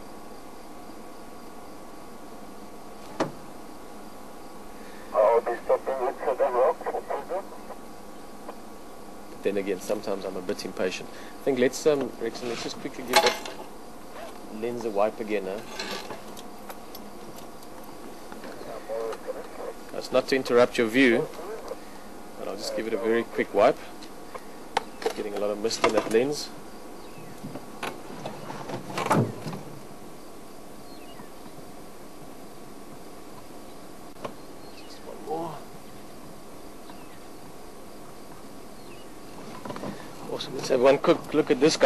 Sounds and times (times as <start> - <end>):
Speech: 5.2 - 7.8, 9.4 - 13.5, 14.5 - 15.7, 18.6 - 21.8, 22.4 - 23.9, 25.1 - 26.6, 34.9 - 35.7, 40.3 - 41.8.